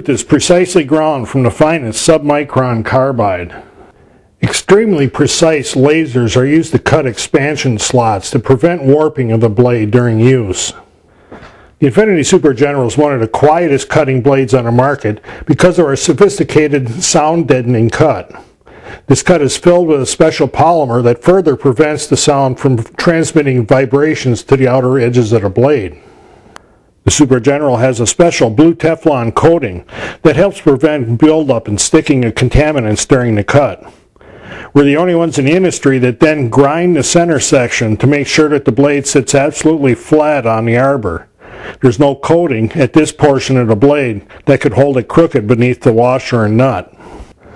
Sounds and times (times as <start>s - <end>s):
Speech: 0.0s - 3.6s, 4.4s - 10.8s, 11.8s - 18.4s, 19.1s - 26.0s, 27.0s - 33.9s, 34.7s - 46.9s.